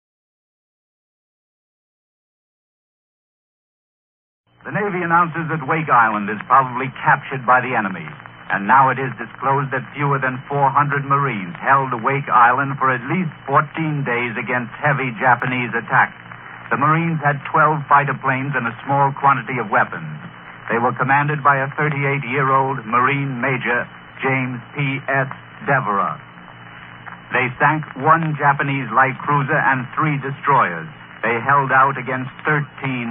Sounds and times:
Radio: 4.6s - 33.1s
Speech: 4.7s - 26.3s, 27.3s - 33.1s.

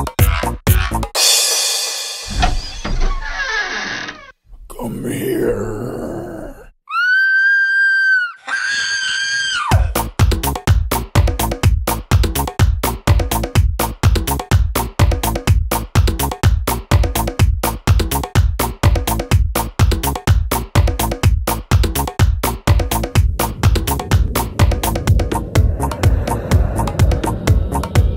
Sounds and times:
Music: 0.0s - 2.6s, 9.7s - 28.1s
Speech: 4.6s - 6.7s.

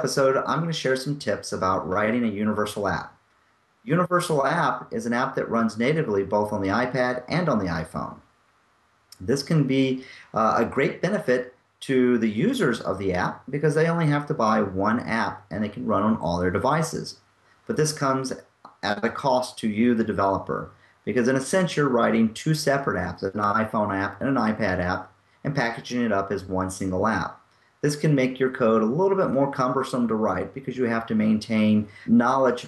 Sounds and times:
Speech: 0.0s - 3.2s, 3.9s - 8.2s, 9.2s - 32.6s.

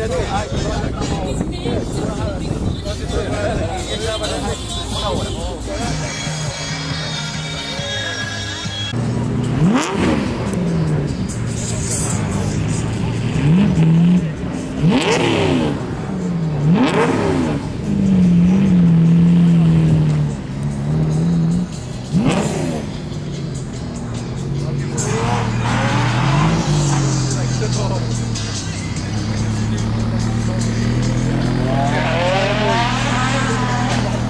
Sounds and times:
Speech: 0.0s - 6.6s, 27.2s - 34.3s
Music: 0.0s - 16.4s, 17.6s - 34.3s
Outside, urban or manmade: 0.0s - 34.3s
Race car, auto racing: 0.0s - 34.3s.

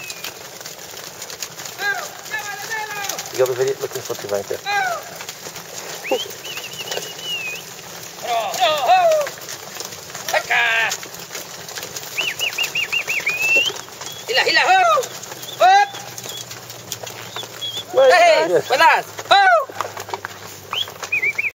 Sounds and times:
Speech: 1.8s - 5.2s, 14.2s - 16.1s, 17.9s - 19.7s.

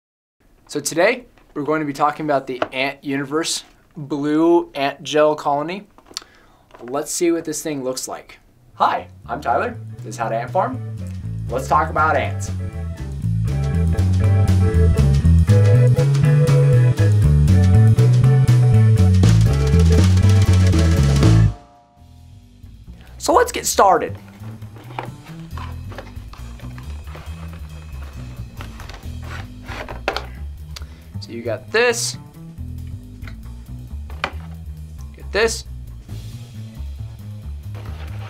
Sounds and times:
Speech: 0.7s - 5.9s, 6.8s - 10.8s, 11.5s - 12.6s, 23.2s - 24.2s, 31.2s - 32.2s, 35.2s - 35.7s
Music: 8.8s - 38.2s.

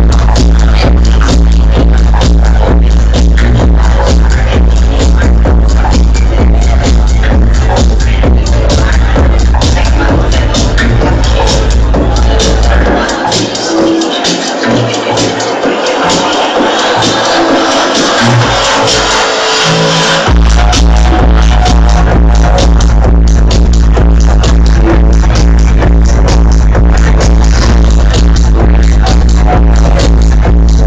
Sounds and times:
Electronic music: 0.0s - 30.8s.

